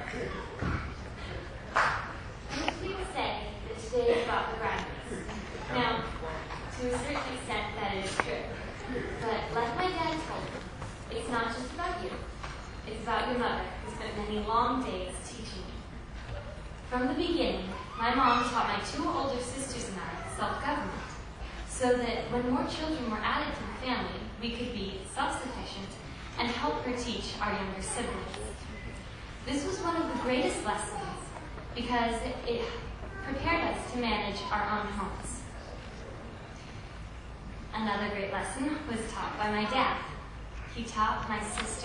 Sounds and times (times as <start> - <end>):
Narration, monologue: 2.0 - 41.8
Female speech, woman speaking: 2.5 - 8.6, 9.2 - 15.9, 16.9 - 28.6, 29.4 - 35.5, 37.7 - 40.2, 40.8 - 41.8.